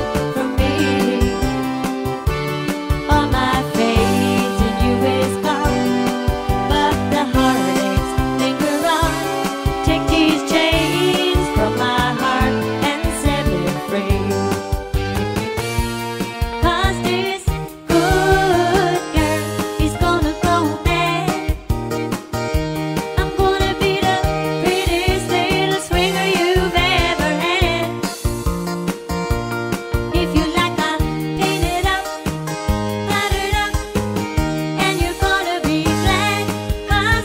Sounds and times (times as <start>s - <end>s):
Jingle (music): 0.0s - 37.2s.